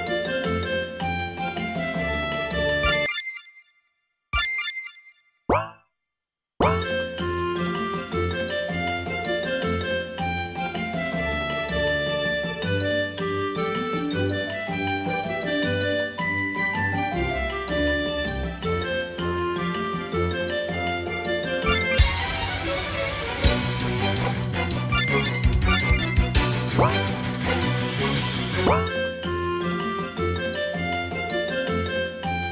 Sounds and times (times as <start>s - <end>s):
Funny music: 0.0s - 3.4s, 6.6s - 32.5s.